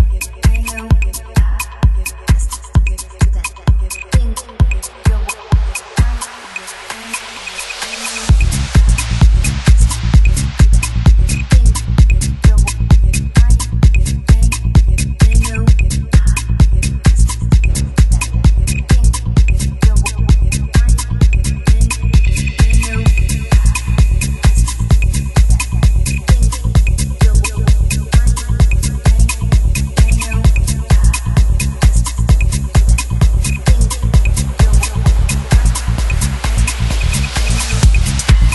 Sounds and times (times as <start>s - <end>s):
Disco: 0.0s - 38.5s
Drum and bass: 0.0s - 38.5s
House music: 0.0s - 38.5s
Techno: 0.0s - 38.5s
Trance music: 0.0s - 38.5s.